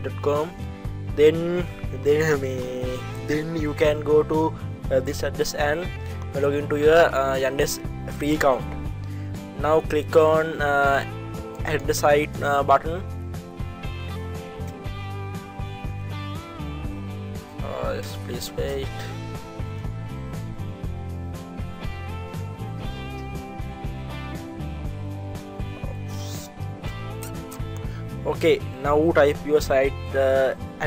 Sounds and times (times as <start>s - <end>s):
Speech: 0.0s - 0.5s, 1.2s - 8.6s, 9.6s - 13.0s, 17.6s - 19.1s, 25.8s - 26.5s, 28.2s - 30.8s
Music: 0.0s - 30.8s.